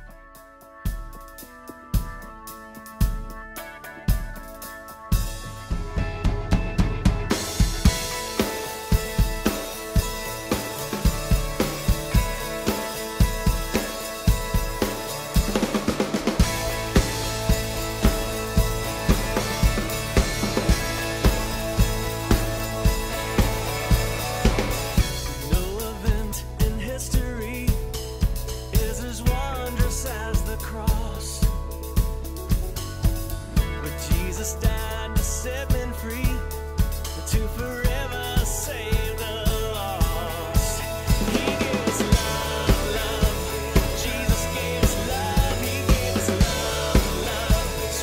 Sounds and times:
Drum kit: 0.0 - 48.0
Bass drum: 5.3 - 48.0.

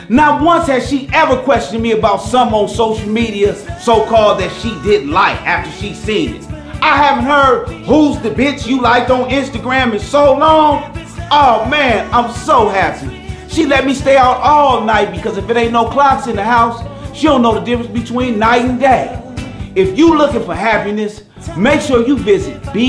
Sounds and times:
Music: 0.0 - 22.8
Speech: 0.1 - 19.2, 19.8 - 22.8.

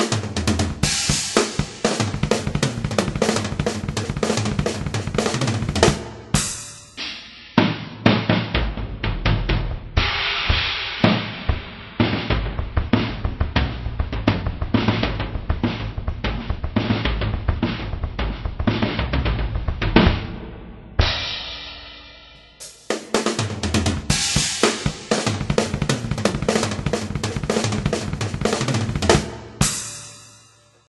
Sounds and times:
Music: 0.0 - 30.9.

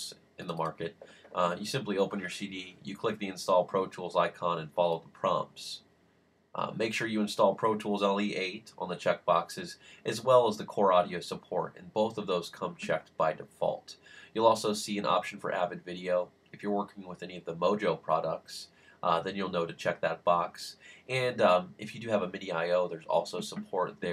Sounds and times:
Speech: 0.0 - 5.8, 6.6 - 24.1.

